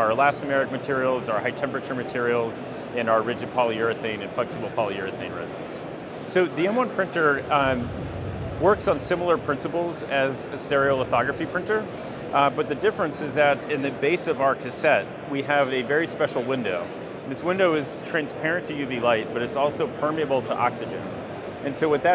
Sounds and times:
Speech: 0.0s - 7.9s, 8.6s - 22.1s.

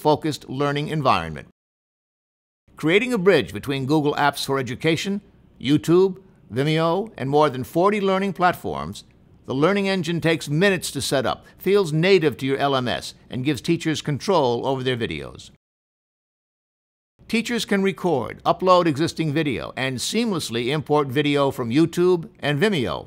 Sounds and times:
Speech: 0.0s - 1.6s, 2.8s - 15.6s, 17.3s - 23.0s.

